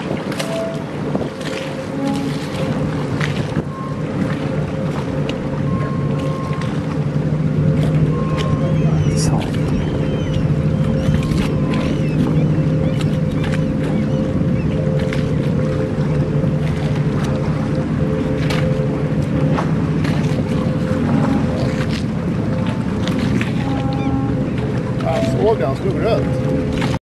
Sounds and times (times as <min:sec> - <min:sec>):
Rowboat, canoe, kayak: 0:00.0 - 0:27.0
Speech: 0:25.0 - 0:26.3.